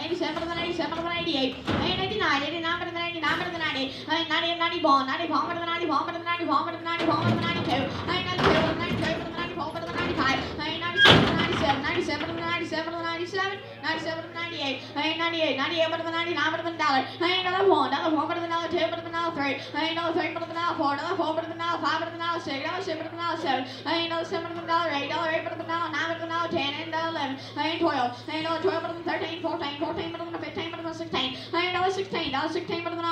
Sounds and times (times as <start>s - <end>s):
Speech: 0.0s - 33.1s.